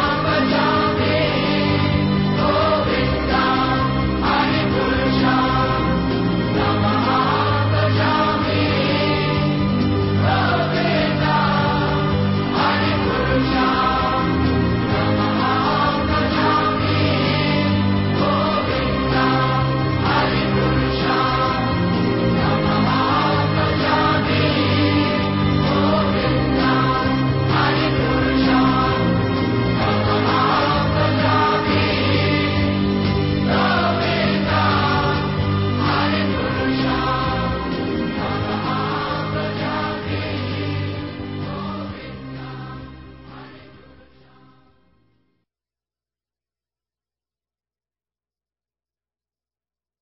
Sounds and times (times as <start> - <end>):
Music: 0.0 - 45.6.